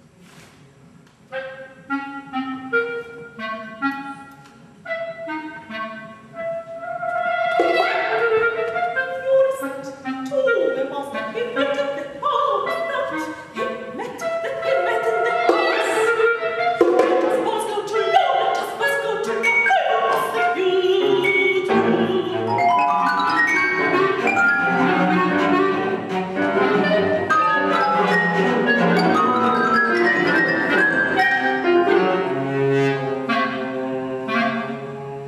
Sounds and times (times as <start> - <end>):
Music: 0.0 - 35.2.